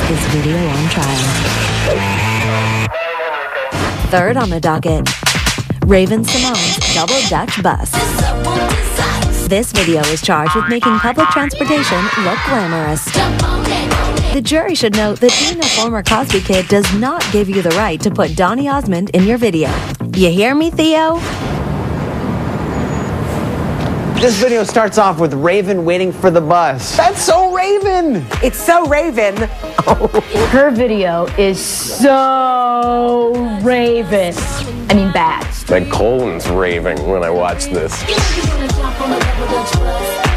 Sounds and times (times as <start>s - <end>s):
Music: 0.0s - 21.2s, 26.6s - 40.3s
Speech: 33.6s - 38.0s.